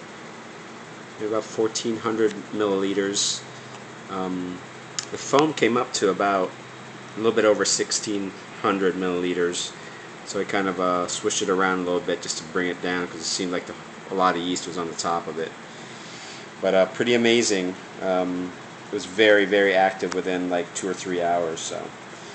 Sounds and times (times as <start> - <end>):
Speech: 1.2 - 3.5, 4.1 - 6.6, 7.2 - 15.6, 16.6 - 22.0.